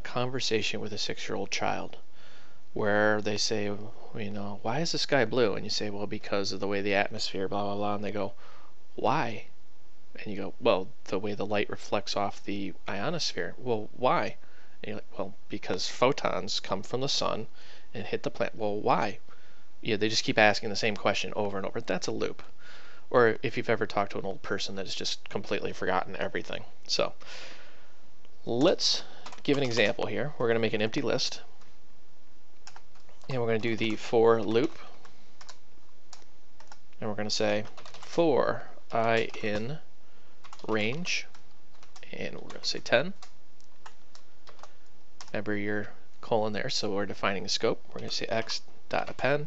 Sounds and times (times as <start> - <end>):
Speech: 0.0 - 2.0, 2.8 - 8.4, 9.0 - 9.5, 10.2 - 19.2, 19.8 - 22.5, 23.1 - 27.2, 28.4 - 31.5, 33.3 - 35.0, 37.0 - 39.9, 40.6 - 41.3, 42.0 - 43.2, 45.3 - 49.4.